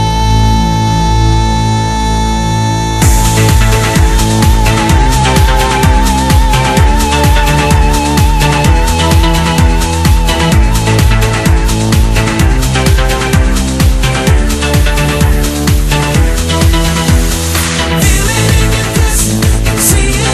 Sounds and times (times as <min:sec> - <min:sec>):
Music: 0:00.0 - 0:20.3.